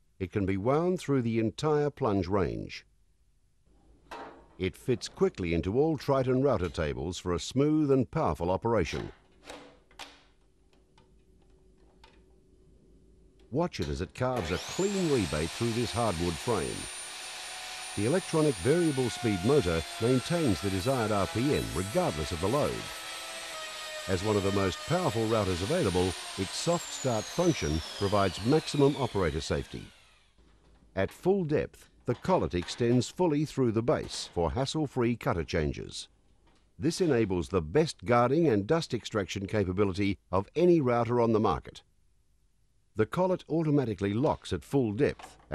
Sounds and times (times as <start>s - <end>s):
Power tool: 14.3s - 30.9s.